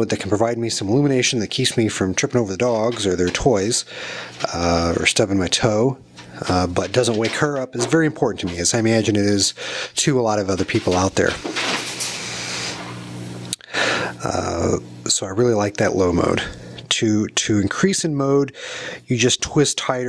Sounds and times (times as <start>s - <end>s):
Speech: 0.0s - 11.4s, 14.2s - 20.0s.